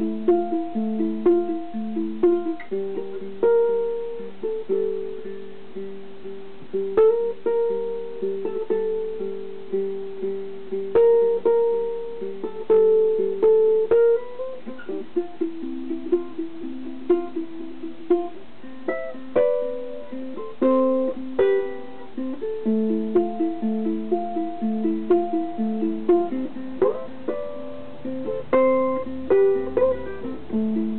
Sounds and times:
Guitar: 0.0 - 30.9
Inside, small room: 0.0 - 30.9
Ukulele: 0.0 - 30.9.

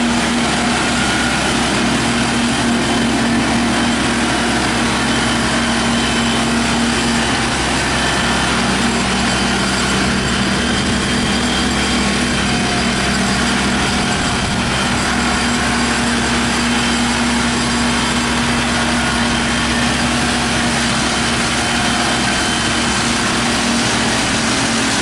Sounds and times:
Outside, rural or natural: 0.0 - 25.0
Vehicle: 0.0 - 25.0.

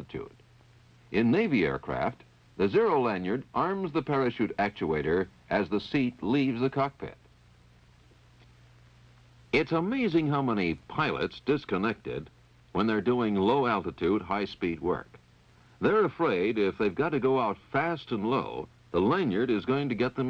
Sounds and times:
Speech: 0.0 - 0.4, 1.1 - 7.3, 9.6 - 15.2, 15.8 - 20.3.

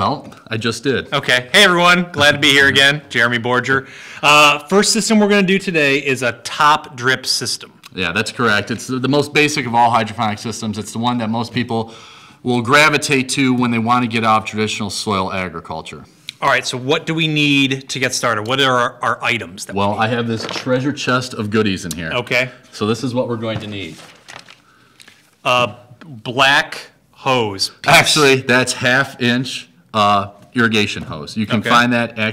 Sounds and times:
Speech: 0.0 - 24.0, 25.5 - 32.3.

